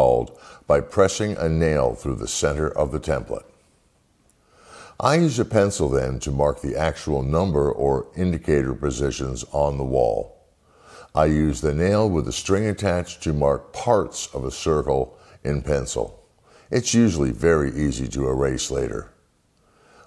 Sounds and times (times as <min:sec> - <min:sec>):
Speech: 0:00.0 - 0:03.6, 0:05.0 - 0:10.4, 0:11.1 - 0:19.2.